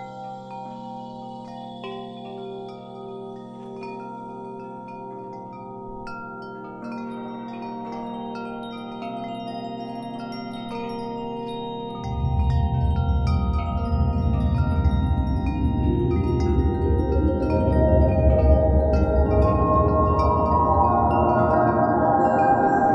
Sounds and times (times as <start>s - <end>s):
Glockenspiel: 0.0s - 22.9s
Marimba, xylophone: 0.0s - 22.9s
Wind chime: 0.0s - 22.9s.